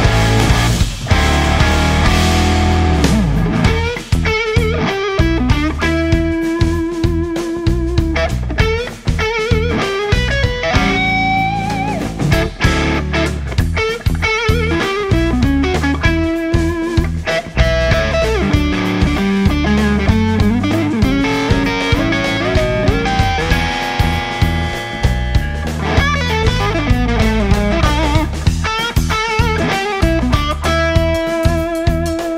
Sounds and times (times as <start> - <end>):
Electric guitar: 0.0 - 32.3.